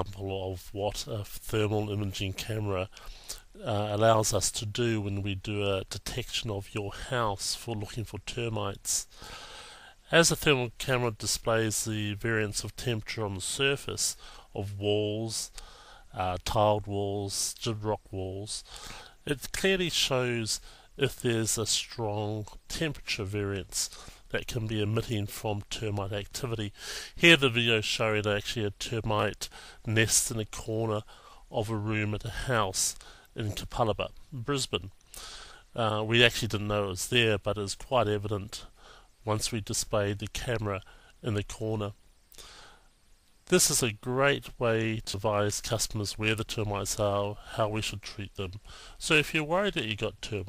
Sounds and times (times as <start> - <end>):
Speech: 0.0 - 2.9, 3.6 - 9.1, 10.1 - 35.0, 35.8 - 42.0, 43.5 - 50.4.